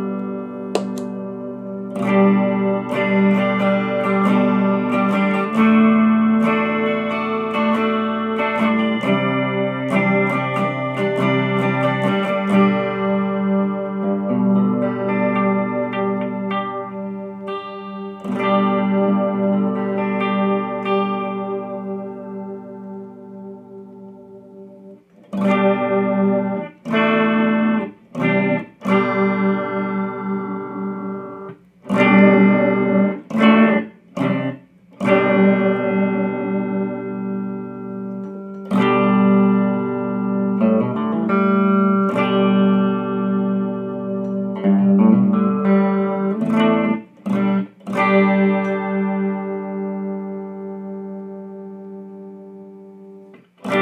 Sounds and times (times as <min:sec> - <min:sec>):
Distortion: 0:00.0 - 0:53.8
Effects unit: 0:00.0 - 0:53.8
Guitar: 0:00.0 - 0:53.8.